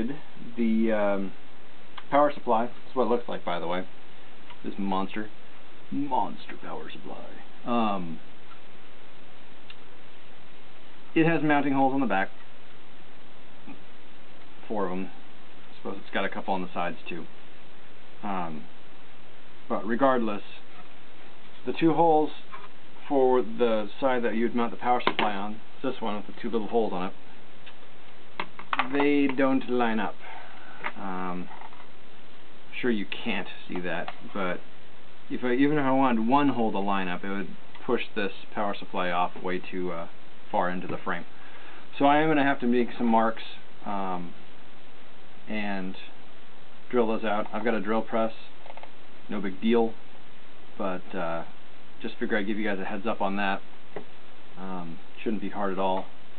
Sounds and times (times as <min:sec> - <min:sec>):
Speech: 0:00.0 - 0:01.4, 0:02.0 - 0:03.9, 0:04.6 - 0:08.2, 0:11.1 - 0:12.4, 0:14.6 - 0:17.3, 0:18.2 - 0:18.7, 0:19.7 - 0:20.7, 0:21.6 - 0:27.2, 0:28.8 - 0:31.6, 0:32.7 - 0:34.7, 0:35.3 - 0:41.3, 0:41.9 - 0:44.4, 0:45.5 - 0:46.2, 0:46.9 - 0:48.6, 0:49.3 - 0:50.0, 0:50.8 - 0:53.7, 0:54.6 - 0:56.1.